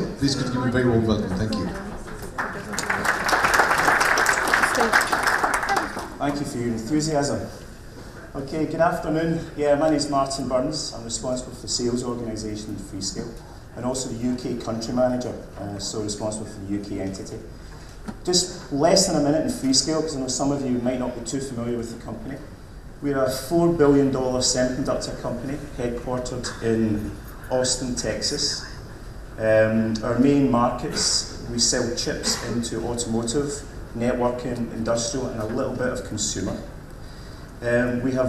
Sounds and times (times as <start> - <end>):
Speech: 5.8 - 7.6, 8.3 - 17.5, 18.2 - 28.7, 29.4 - 36.8, 37.6 - 38.2.